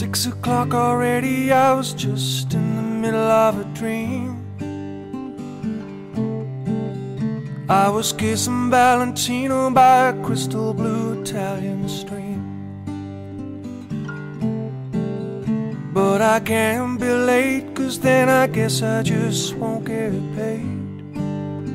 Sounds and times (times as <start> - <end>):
Music: 0.0 - 21.7.